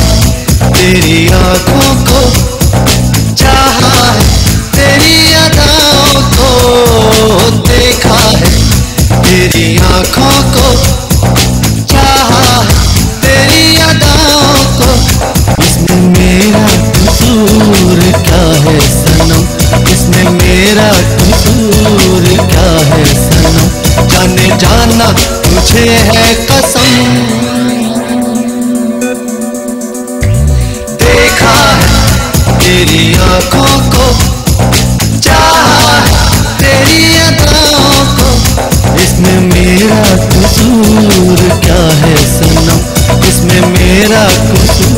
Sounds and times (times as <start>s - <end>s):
Music of Bollywood: 0.0s - 44.9s.